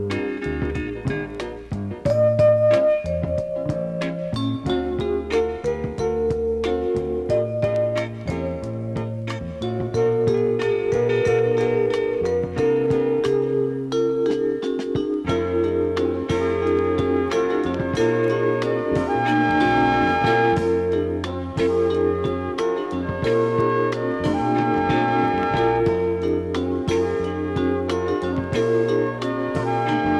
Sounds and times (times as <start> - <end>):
Music: 0.0 - 30.2.